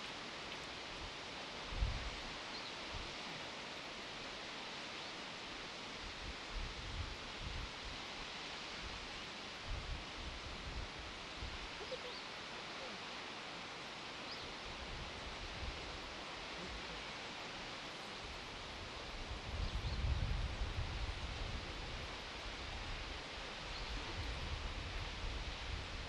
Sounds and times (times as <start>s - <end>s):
Waterfall: 0.0s - 26.0s.